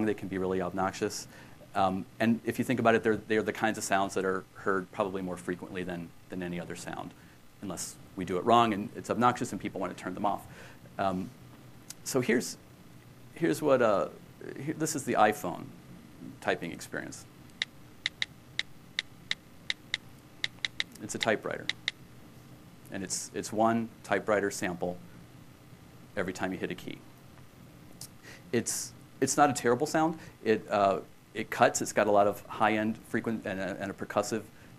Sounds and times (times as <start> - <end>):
Speech: 0.0 - 11.3, 11.9 - 12.6, 13.4 - 17.3, 21.0 - 21.7, 22.9 - 25.0, 26.2 - 27.1, 28.5 - 34.5.